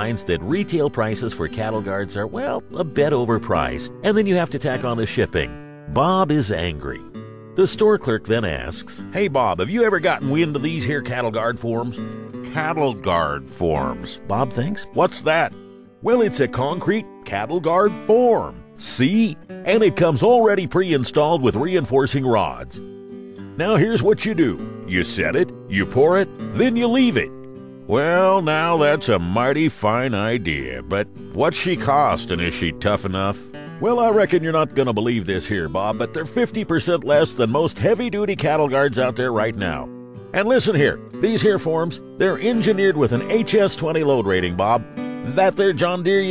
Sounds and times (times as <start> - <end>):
Speech: 0.0 - 22.8, 23.6 - 27.3, 27.9 - 46.3
Music: 0.0 - 46.3.